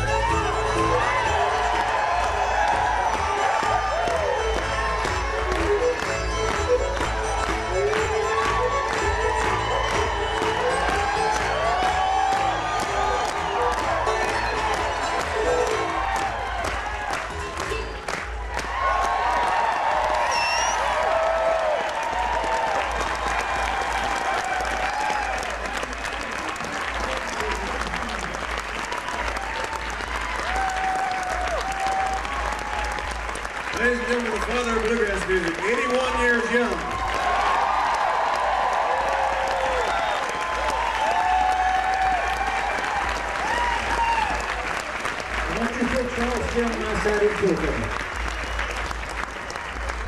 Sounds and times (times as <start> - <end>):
Applause: 0.0 - 50.0
Speech: 33.8 - 36.8, 45.5 - 47.9.